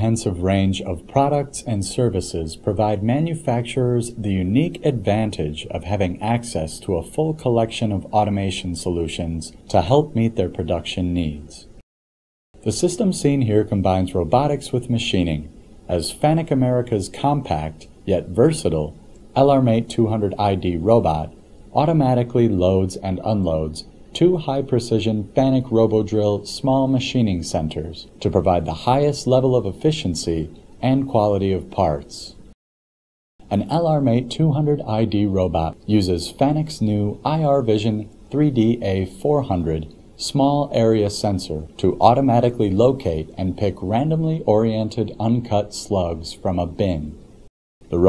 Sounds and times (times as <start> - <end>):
Speech: 0.0 - 11.8, 12.6 - 32.5, 33.4 - 48.0.